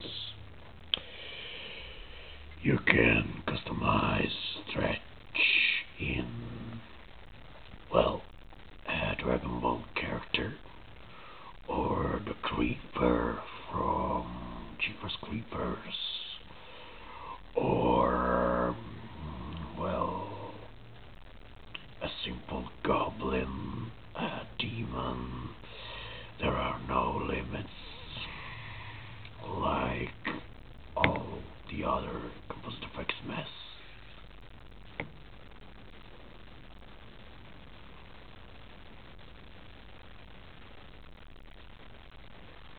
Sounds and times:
Speech: 0.0 - 0.4, 2.6 - 6.9, 7.9 - 8.3, 8.9 - 10.6, 11.7 - 16.5, 17.6 - 20.7, 21.8 - 25.6, 26.4 - 28.4, 29.4 - 33.8
Inside, small room: 0.0 - 42.7.

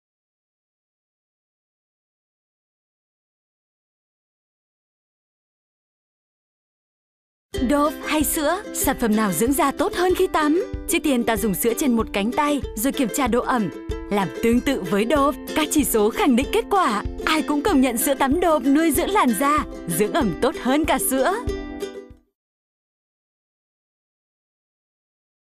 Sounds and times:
Music: 7.5 - 22.4
Speech: 7.6 - 21.5.

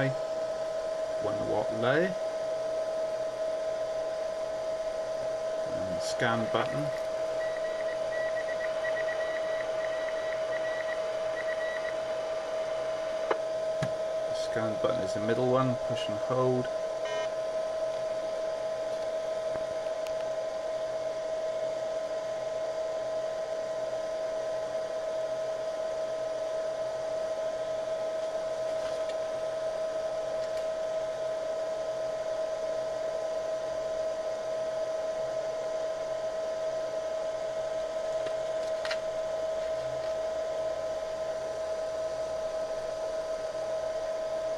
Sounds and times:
Speech: 0.0 - 0.2, 1.2 - 2.2, 5.7 - 7.0, 14.3 - 16.7
Radio: 1.2 - 2.2, 5.6 - 7.1, 8.6 - 13.4, 14.4 - 16.7.

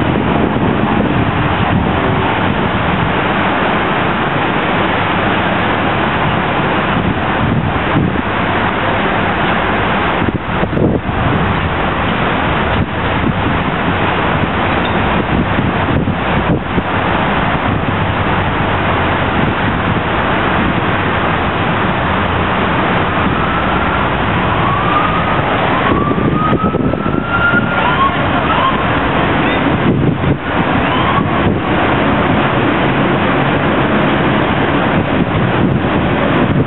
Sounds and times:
Police car (siren): 23.1 - 29.7, 30.6 - 31.6.

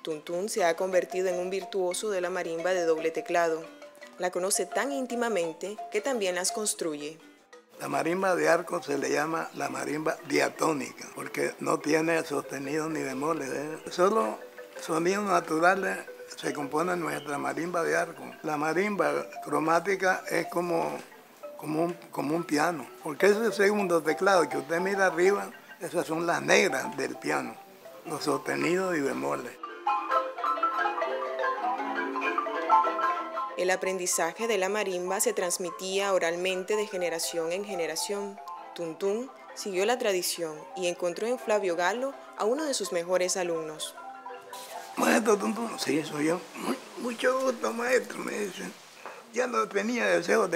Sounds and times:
Marimba, xylophone: 0.0 - 50.5.

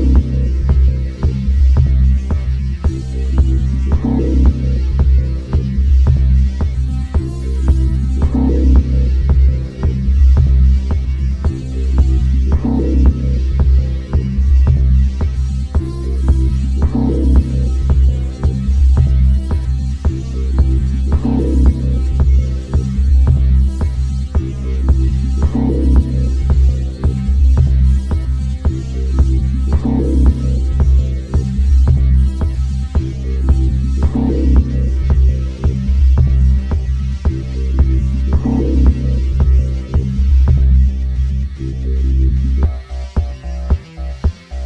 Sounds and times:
Music: 0.0 - 44.6.

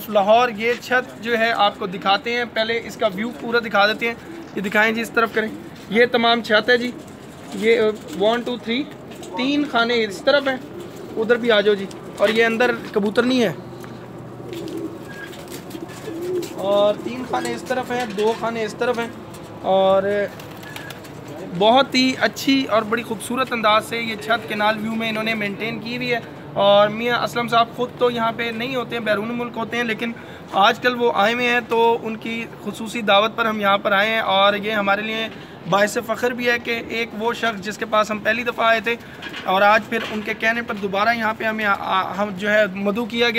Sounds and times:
Speech: 0.0 - 10.6, 11.2 - 13.6, 16.6 - 20.4, 21.3 - 43.3
Pigeon, dove: 6.7 - 12.9, 13.6 - 18.3, 20.3 - 21.6.

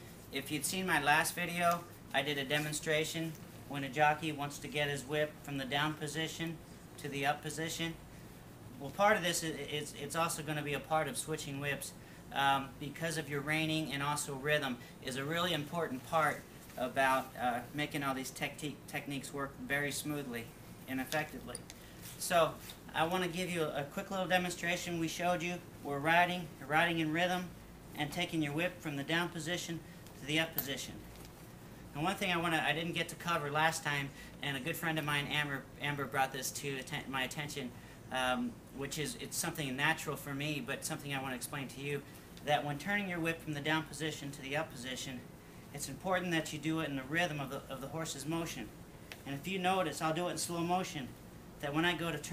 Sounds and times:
Speech: 0.3 - 8.0, 8.7 - 21.6, 22.2 - 31.0, 31.9 - 52.3.

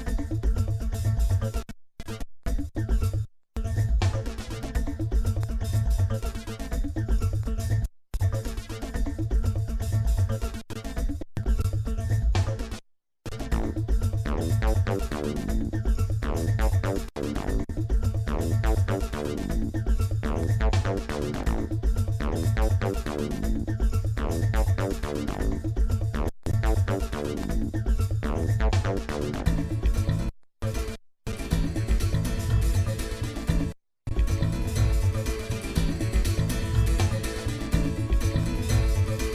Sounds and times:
Music: 0.0 - 1.6, 3.6 - 39.3.

